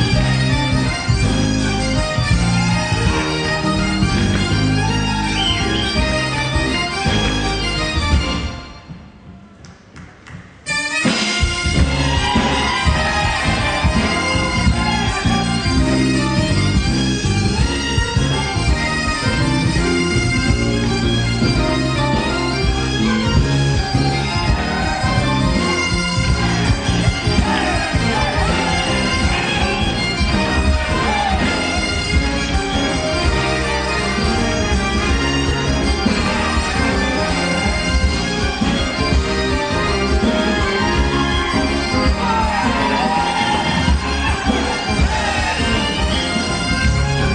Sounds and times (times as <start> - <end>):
Bagpipes: 0.0 - 9.0, 10.6 - 47.3.